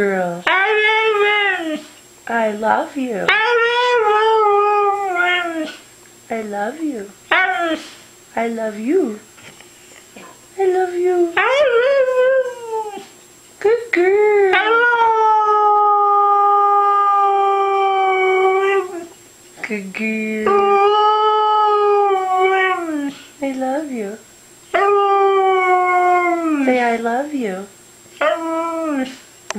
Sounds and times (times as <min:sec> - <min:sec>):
Howl: 0:14.5 - 0:19.1, 0:20.5 - 0:23.1, 0:24.8 - 0:26.8.